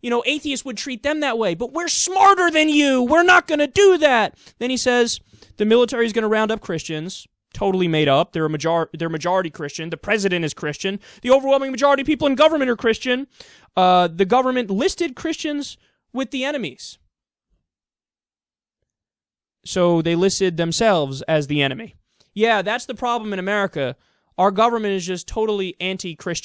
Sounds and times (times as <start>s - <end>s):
Speech: 0.0s - 17.1s, 19.6s - 26.4s.